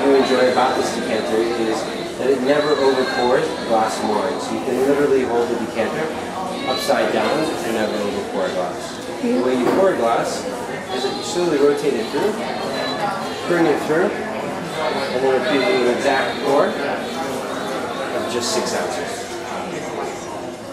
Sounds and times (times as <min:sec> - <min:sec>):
Inside, large room or hall: 0:00.0 - 0:20.7
Speech: 0:00.0 - 0:20.7.